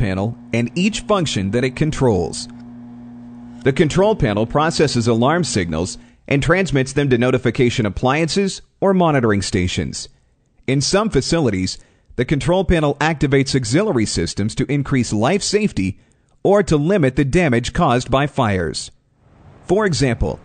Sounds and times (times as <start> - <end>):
Speech: 0.0 - 2.5, 3.6 - 10.1, 10.7 - 19.0, 19.7 - 20.4.